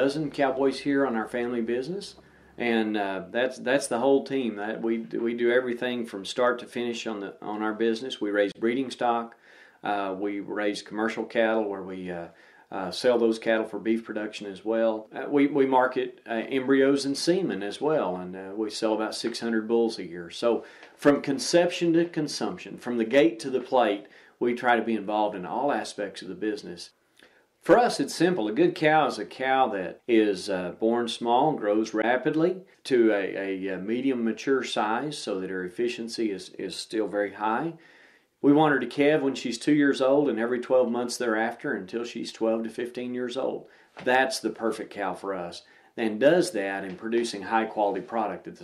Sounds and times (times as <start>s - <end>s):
Speech: 0.0s - 27.0s, 27.6s - 37.8s, 38.4s - 48.6s.